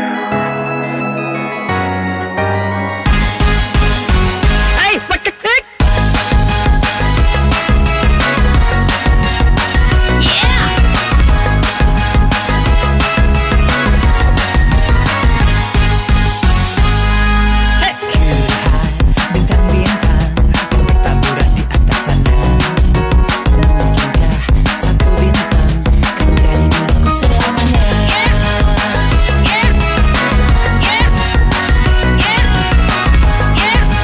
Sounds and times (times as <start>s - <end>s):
Music: 0.0s - 34.0s.